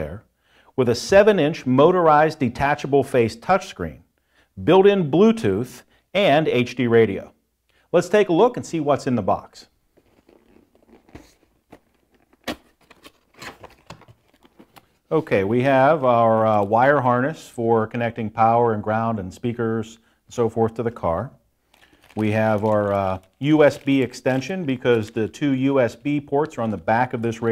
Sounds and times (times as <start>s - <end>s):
Speech: 0.0s - 9.7s, 15.1s - 21.4s, 22.2s - 27.5s
Inside, small room: 0.0s - 27.5s.